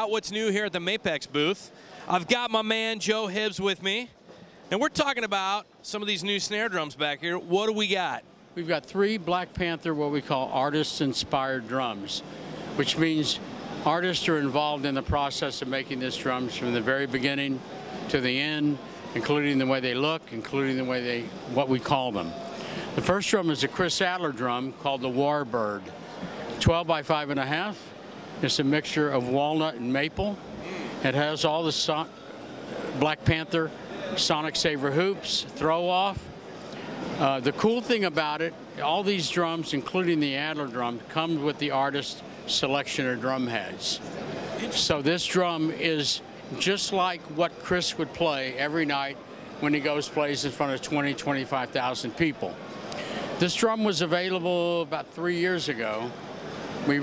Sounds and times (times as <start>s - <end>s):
Speech: 0.0s - 22.4s, 23.0s - 25.9s, 26.6s - 32.2s, 33.0s - 36.3s, 37.2s - 52.6s, 53.4s - 56.2s.